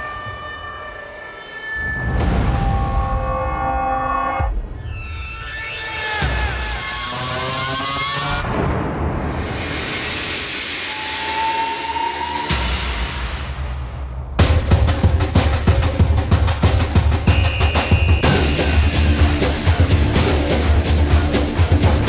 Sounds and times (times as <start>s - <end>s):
Music: 0.0s - 22.0s.